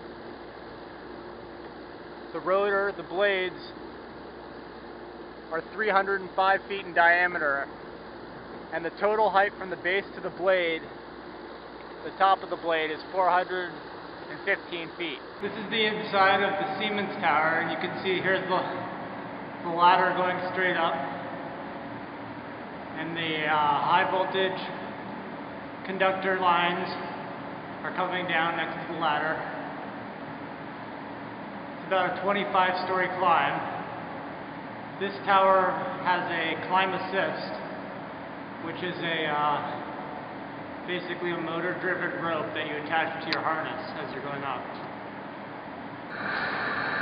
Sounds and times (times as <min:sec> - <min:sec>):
Speech: 0:02.3 - 0:03.8, 0:05.5 - 0:07.7, 0:08.7 - 0:10.9, 0:12.0 - 0:18.9, 0:19.6 - 0:21.2, 0:23.0 - 0:24.8, 0:25.8 - 0:27.2, 0:27.8 - 0:29.6, 0:31.8 - 0:33.8, 0:35.0 - 0:37.6, 0:38.6 - 0:39.8, 0:40.9 - 0:44.9.